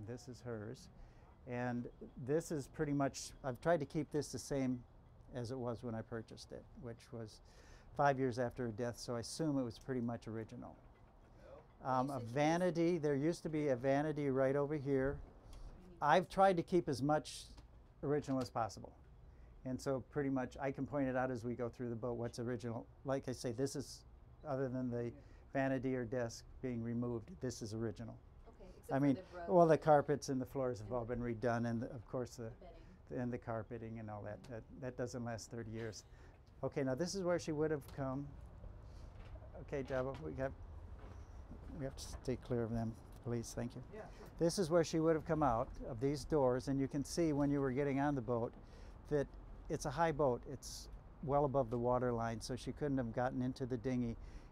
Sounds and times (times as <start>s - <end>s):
Speech: 0.0s - 0.9s, 1.5s - 7.4s, 8.0s - 10.8s, 11.5s - 15.2s, 16.0s - 19.0s, 19.7s - 28.2s, 28.8s - 36.0s, 36.6s - 38.3s, 39.6s - 40.6s, 41.7s - 48.5s, 49.1s - 54.2s.